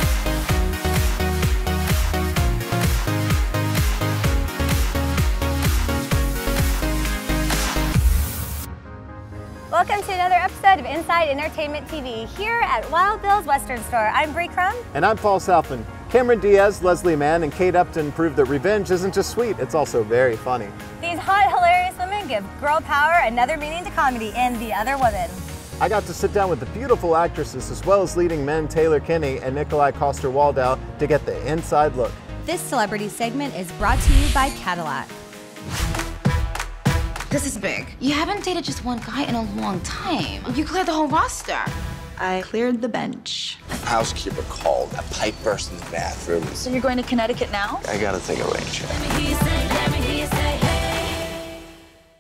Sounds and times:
Music: 0.0s - 52.2s.

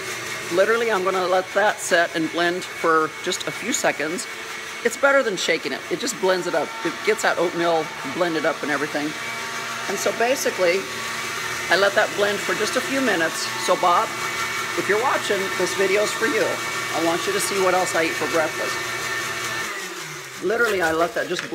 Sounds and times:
Speech: 0.5s - 4.3s, 4.9s - 9.2s, 9.9s - 10.9s, 11.7s - 14.1s, 14.8s - 18.8s, 20.4s - 21.5s.

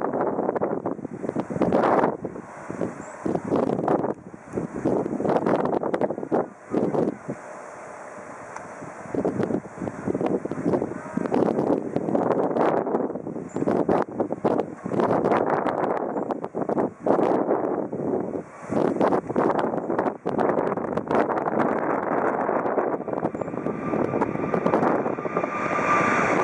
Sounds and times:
Fixed-wing aircraft, airplane: 0.0s - 26.4s
Wind: 0.0s - 26.4s.

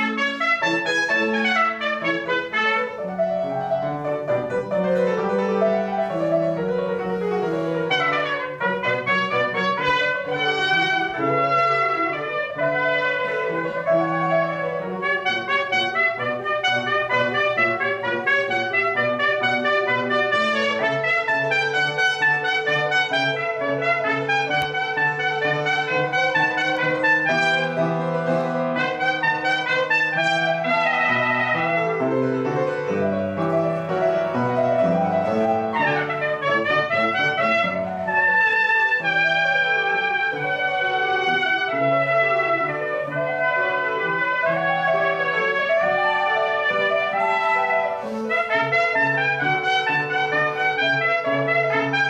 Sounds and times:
Piano: 0.0s - 52.1s
Trumpet: 0.0s - 52.1s.

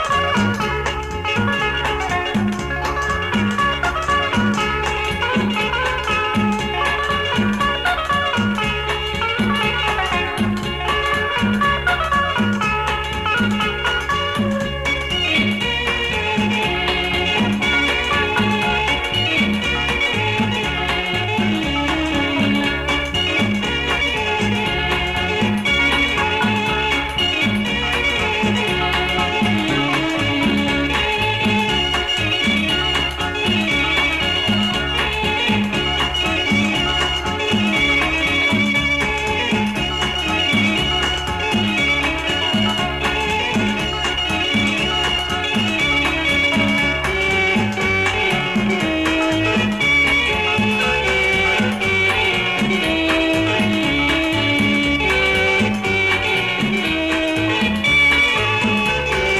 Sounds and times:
Folk music: 0.0s - 59.3s
Middle Eastern music: 0.0s - 59.3s.

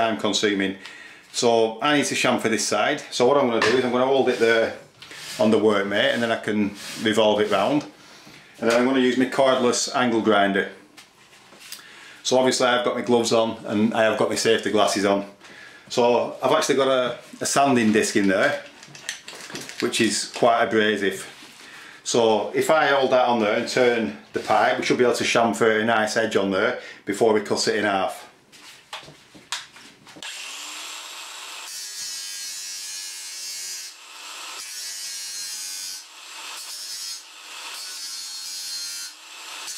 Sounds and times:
Inside, small room: 0.0s - 39.7s.

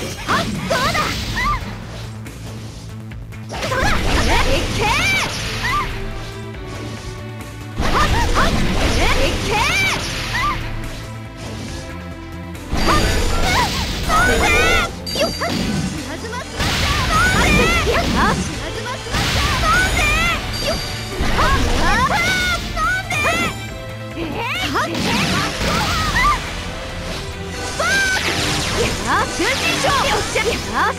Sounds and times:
Music: 0.0s - 30.9s
Speech: 17.1s - 19.0s, 24.2s - 25.5s, 28.8s - 30.9s.

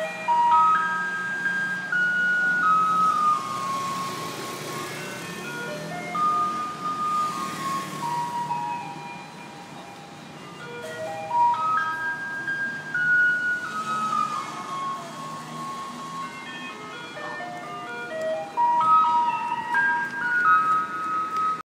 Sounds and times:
Music: 13.5s - 21.6s.

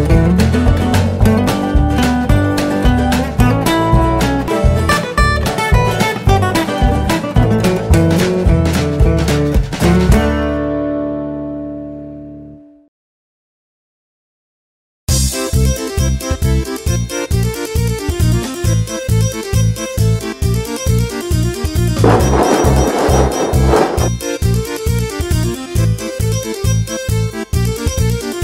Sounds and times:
Music: 0.0s - 12.9s, 15.1s - 28.4s.

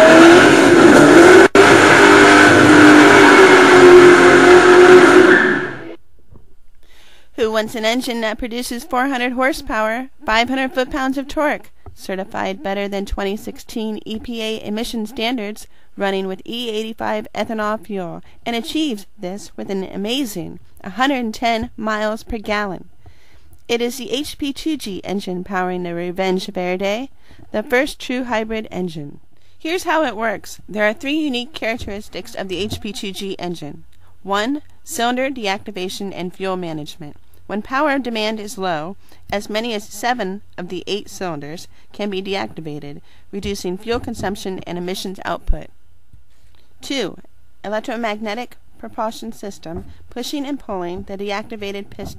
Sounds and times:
Speech: 7.4s - 22.8s, 23.7s - 45.7s, 46.8s - 52.1s.

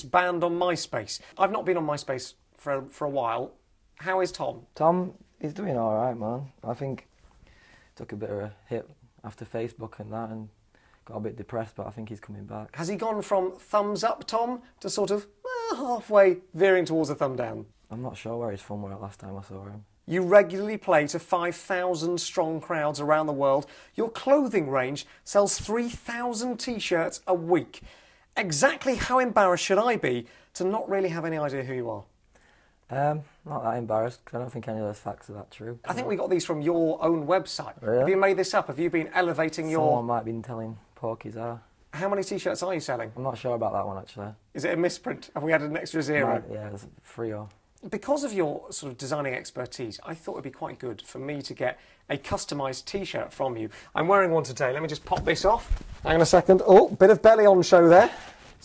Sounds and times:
Speech: 0.0s - 7.1s, 8.0s - 27.8s, 28.4s - 32.1s, 32.9s - 58.6s.

